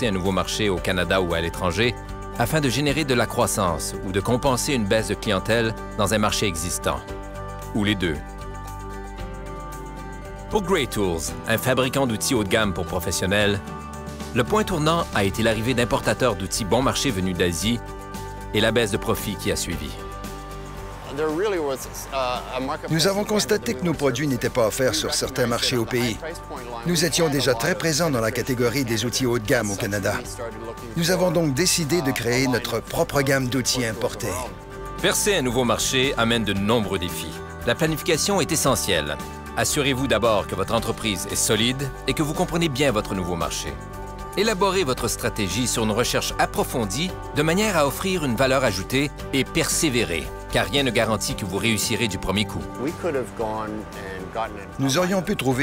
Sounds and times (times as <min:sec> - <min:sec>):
Speech: 0:00.0 - 0:07.0, 0:07.7 - 0:08.2, 0:10.5 - 0:13.6, 0:14.4 - 0:17.8, 0:18.6 - 0:20.0, 0:21.1 - 0:43.8, 0:44.4 - 0:55.6
Music: 0:00.0 - 0:55.6.